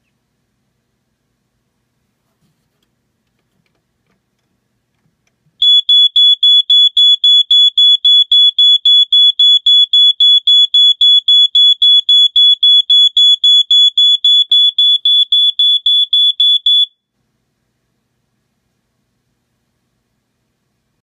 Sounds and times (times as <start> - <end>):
Smoke detector, smoke alarm: 5.6 - 17.1.